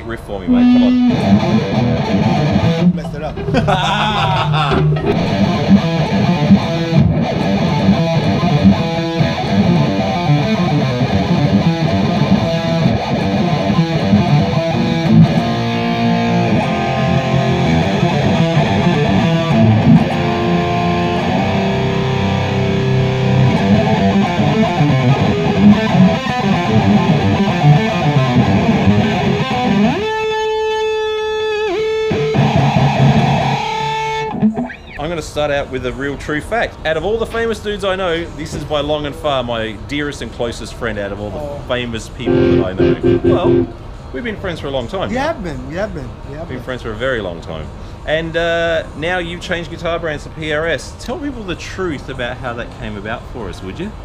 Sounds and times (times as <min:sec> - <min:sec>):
Strum: 0:00.5 - 0:03.2, 0:04.7 - 0:29.1, 0:42.3 - 0:43.8
Electric guitar: 0:00.5 - 0:03.7, 0:04.5 - 0:35.0, 0:42.3 - 0:43.8
Bass guitar: 0:00.5 - 0:30.3, 0:31.6 - 0:35.0, 0:42.3 - 0:43.8.